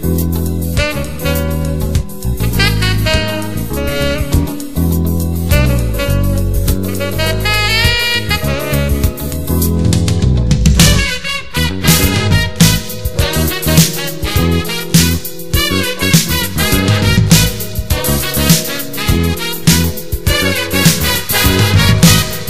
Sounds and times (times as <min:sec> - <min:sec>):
Happy music: 0:00.0 - 0:22.4.